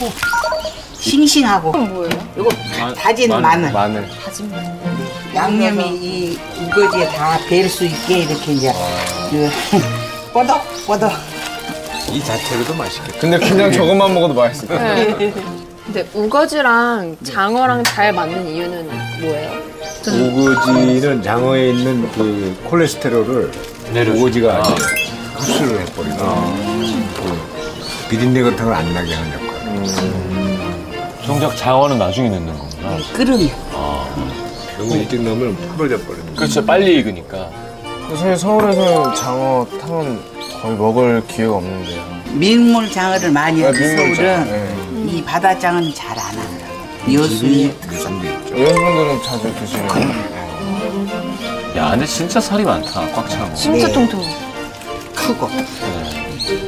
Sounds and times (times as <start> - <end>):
Music: 0.0 - 56.6.